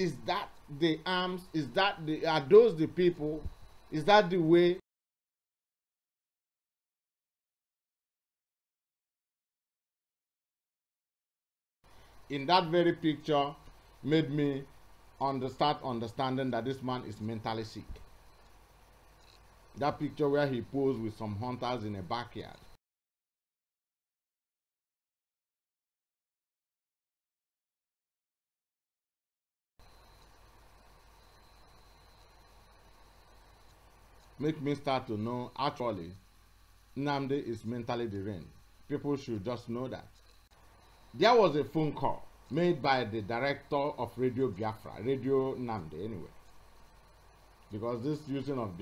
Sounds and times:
Speech: 0.0 - 4.8, 12.3 - 18.0, 19.8 - 22.6, 34.4 - 36.2, 37.0 - 40.2, 41.2 - 46.3, 47.7 - 48.8.

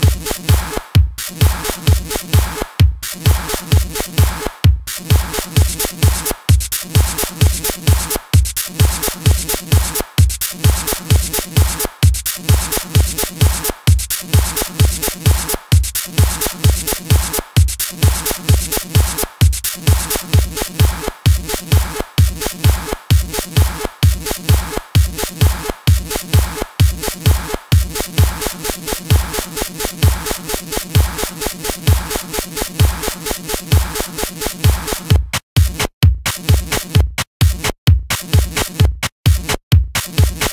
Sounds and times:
Electronic dance music: 0.0 - 40.5
Techno: 0.0 - 40.5.

